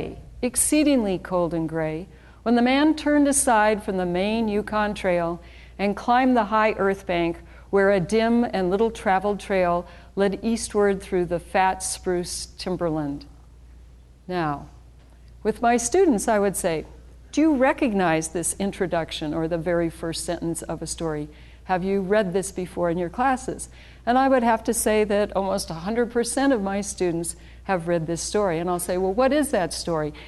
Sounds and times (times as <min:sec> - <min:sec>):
Speech: 0:00.0 - 0:13.3, 0:14.3 - 0:14.8, 0:15.4 - 0:30.2.